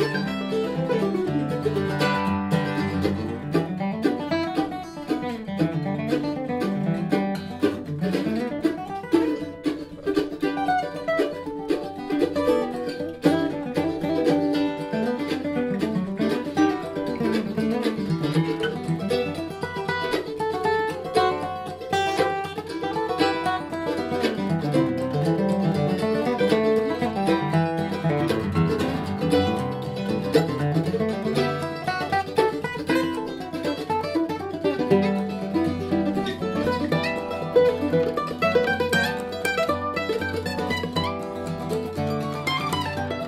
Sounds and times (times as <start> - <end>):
Acoustic guitar: 0.0 - 43.2
Bluegrass: 0.0 - 43.2
Mandolin: 0.0 - 43.2.